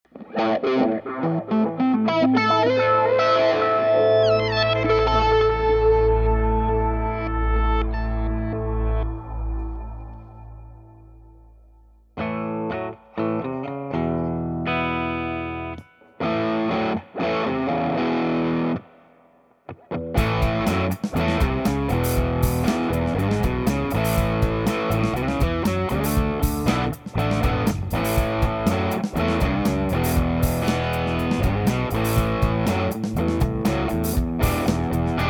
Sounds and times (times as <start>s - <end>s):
Effects unit: 0.0s - 35.2s
Guitar: 0.0s - 35.2s.